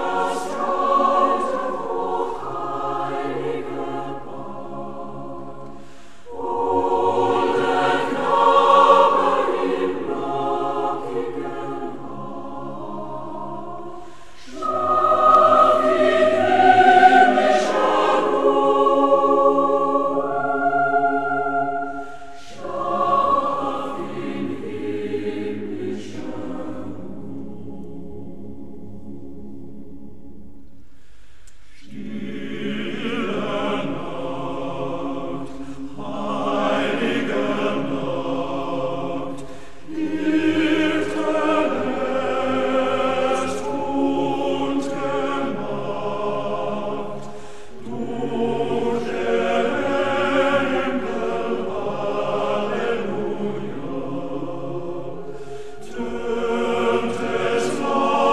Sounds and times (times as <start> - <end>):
Christmas music: 0.0 - 5.7, 6.3 - 30.5, 31.9 - 58.3.